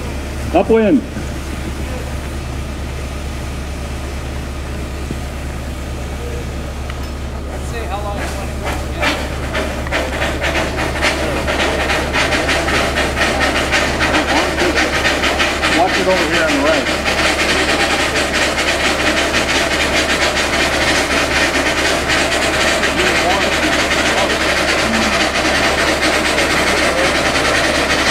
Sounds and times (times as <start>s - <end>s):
Speech: 0.5s - 1.1s, 7.6s - 9.2s, 23.0s - 24.6s.